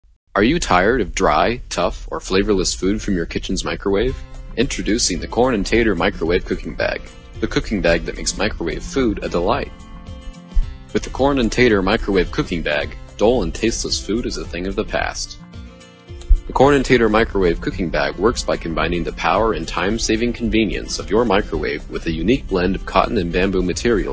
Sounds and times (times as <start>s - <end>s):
Speech: 0.4s - 9.7s, 10.9s - 15.4s, 16.3s - 24.1s
Music: 0.4s - 24.1s.